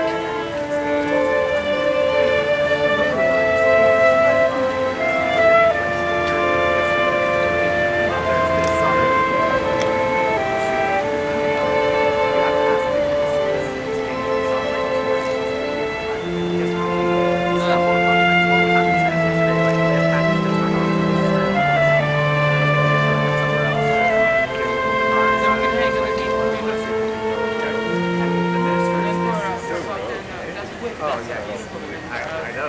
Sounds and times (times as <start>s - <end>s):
Flute: 0.0s - 32.6s
Speech: 0.0s - 32.6s
Violin, fiddle: 0.0s - 32.6s.